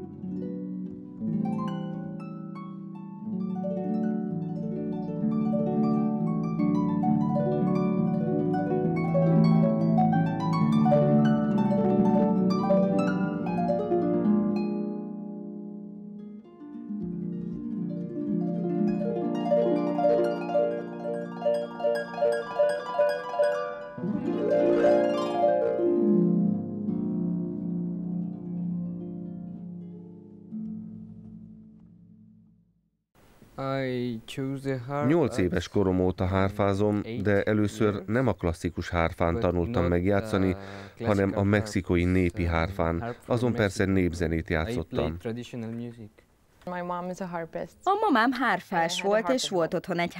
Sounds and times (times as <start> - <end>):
Harp: 0.0 - 32.1.